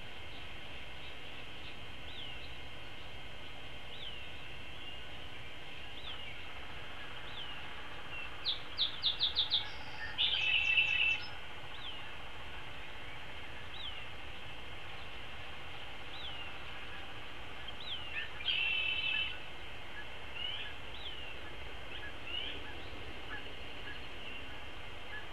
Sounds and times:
Bird: 0:00.0 - 0:25.3.

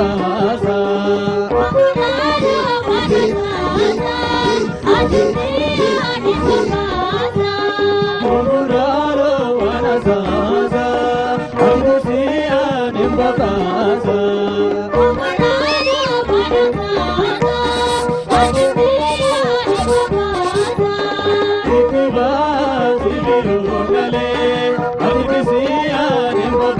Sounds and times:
Music: 0:00.0 - 0:26.7.

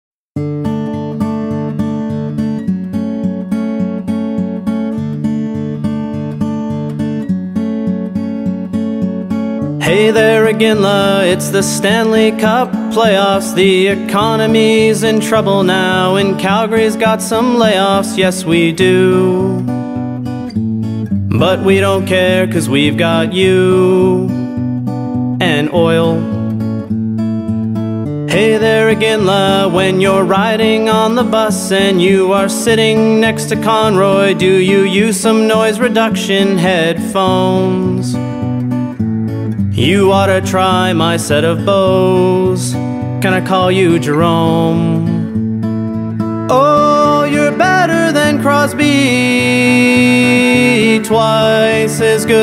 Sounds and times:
Acoustic guitar: 0:00.4 - 0:52.4.

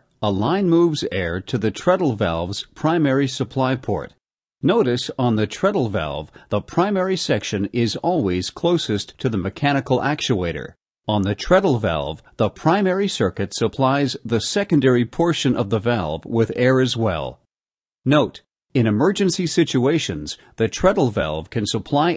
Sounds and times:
Speech: 0:00.0 - 0:17.4, 0:18.1 - 0:22.1.

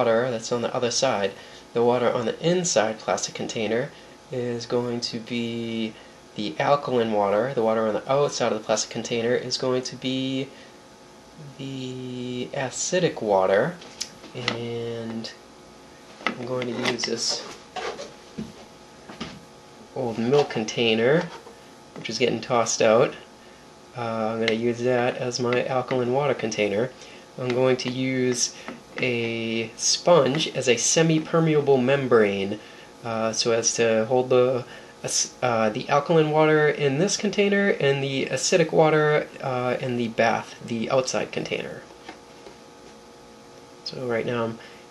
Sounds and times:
Speech: 0:00.0 - 0:10.5, 0:11.4 - 0:15.4, 0:16.3 - 0:18.0, 0:19.9 - 0:21.4, 0:22.0 - 0:23.3, 0:24.0 - 0:41.9, 0:43.9 - 0:44.6.

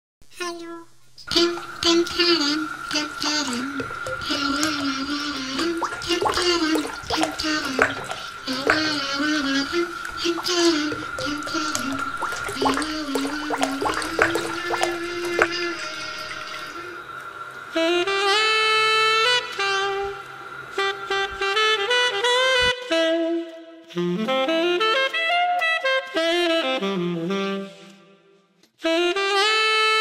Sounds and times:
Speech: 0:00.3 - 0:00.9.

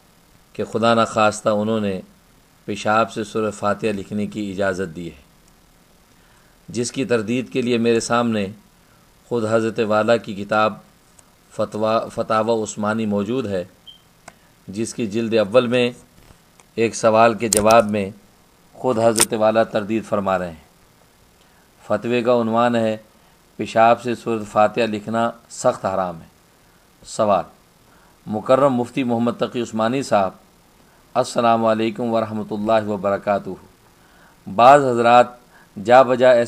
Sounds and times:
Speech: 0:00.5 - 0:02.1, 0:02.7 - 0:05.3, 0:06.7 - 0:08.6, 0:09.3 - 0:10.9, 0:11.5 - 0:13.8, 0:14.7 - 0:16.1, 0:16.8 - 0:18.2, 0:18.8 - 0:20.7, 0:21.8 - 0:26.4, 0:27.0 - 0:27.6, 0:28.3 - 0:30.4, 0:31.2 - 0:33.7, 0:34.5 - 0:36.4.

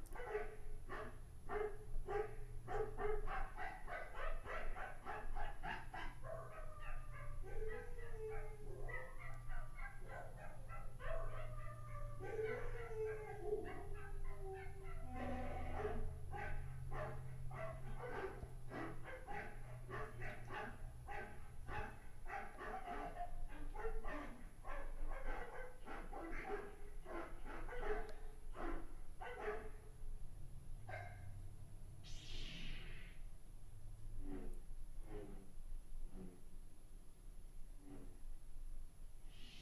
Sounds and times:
Sound effect: 0:32.0 - 0:33.3.

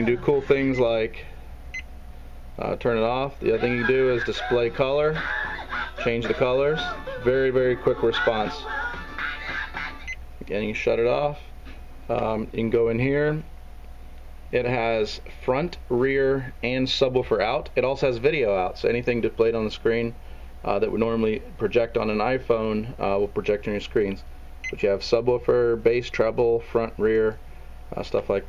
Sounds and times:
Speech: 0:00.0 - 0:01.3, 0:02.6 - 0:05.2, 0:06.0 - 0:08.6, 0:10.4 - 0:11.5, 0:12.1 - 0:13.5, 0:14.5 - 0:28.4
Music: 0:03.6 - 0:10.2.

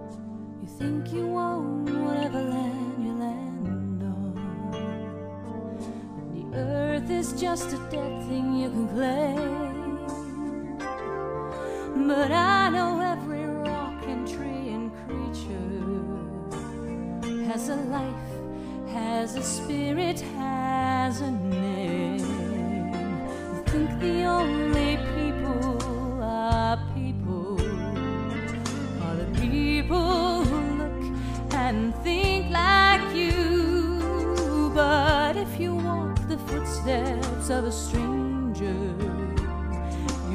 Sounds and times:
Music: 0:00.0 - 0:40.3.

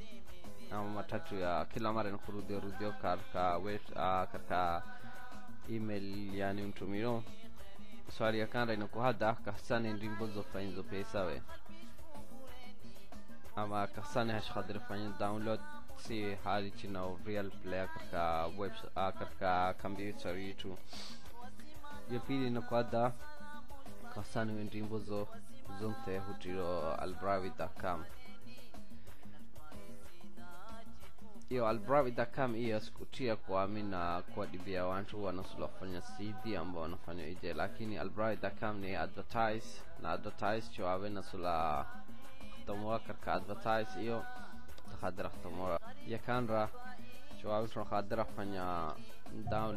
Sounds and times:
Music: 0:00.0 - 0:49.7
Speech: 0:00.7 - 0:04.8, 0:05.7 - 0:07.3, 0:08.1 - 0:11.5, 0:13.6 - 0:21.0, 0:22.1 - 0:23.2, 0:24.1 - 0:28.1, 0:31.5 - 0:41.9, 0:42.6 - 0:46.8, 0:47.4 - 0:49.7.

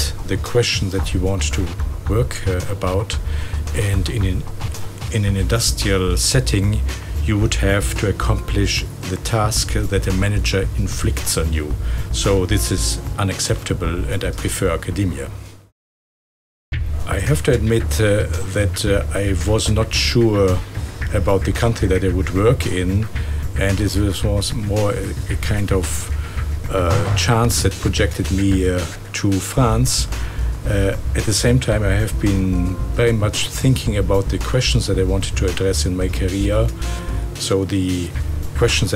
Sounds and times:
Speech: 0:00.0 - 0:15.4, 0:17.0 - 0:38.9
Music: 0:00.0 - 0:15.7, 0:16.8 - 0:38.9.

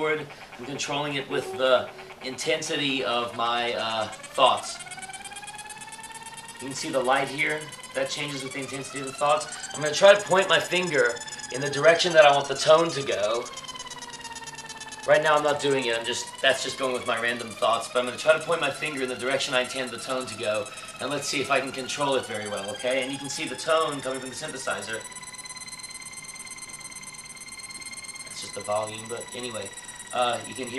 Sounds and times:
Speech: 0:00.0 - 0:04.8, 0:06.6 - 0:13.5, 0:15.1 - 0:25.0, 0:28.4 - 0:30.7.

